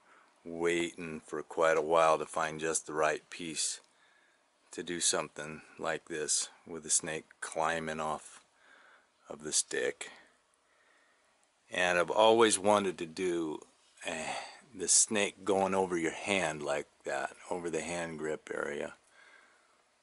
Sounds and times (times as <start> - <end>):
Speech: 0.5 - 3.9, 4.7 - 8.4, 9.3 - 10.3, 11.7 - 19.0.